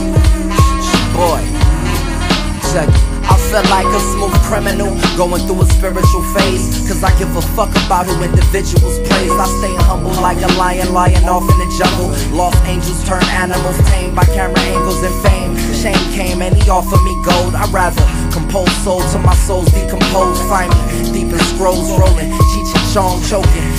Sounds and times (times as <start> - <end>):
Music: 0.0 - 23.7.